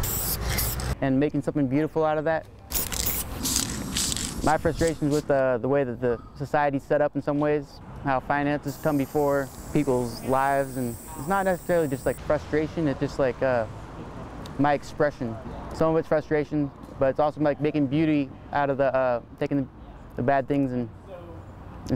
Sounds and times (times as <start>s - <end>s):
Hiss: 0.0s - 0.8s, 8.7s - 12.2s.